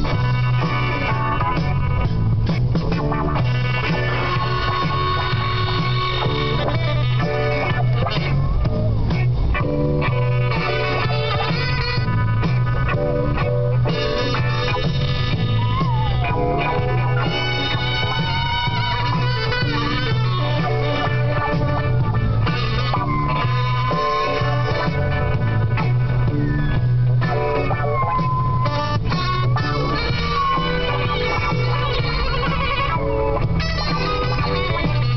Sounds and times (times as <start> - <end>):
Music: 0.0 - 35.1.